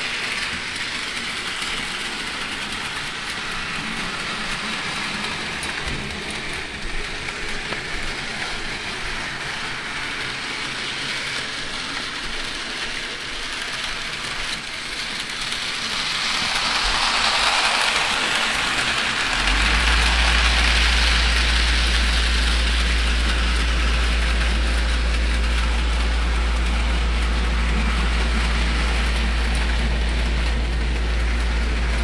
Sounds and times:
Heavy engine (low frequency): 0.0s - 32.0s.

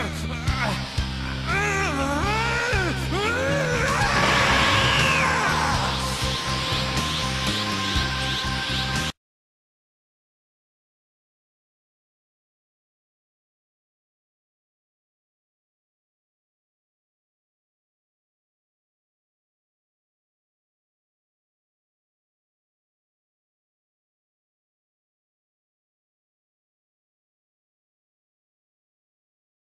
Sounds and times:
Music: 0.0s - 9.2s.

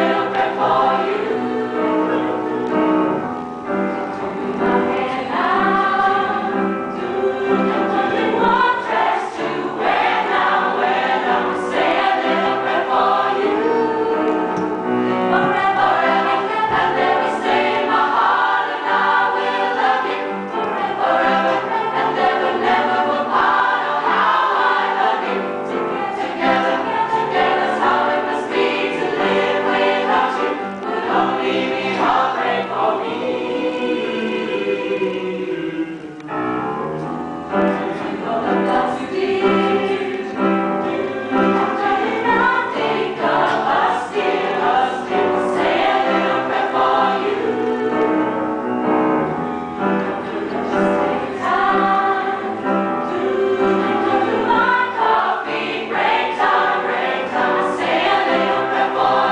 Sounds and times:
Choir: 0.0s - 36.4s, 37.0s - 59.3s.

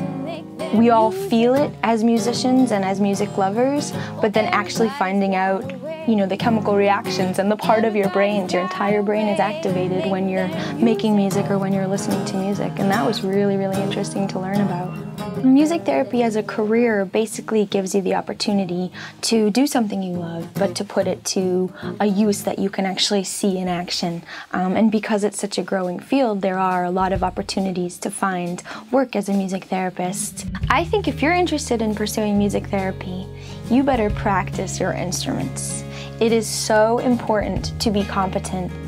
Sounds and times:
Music: 0.0s - 38.8s
Speech: 0.7s - 38.8s.

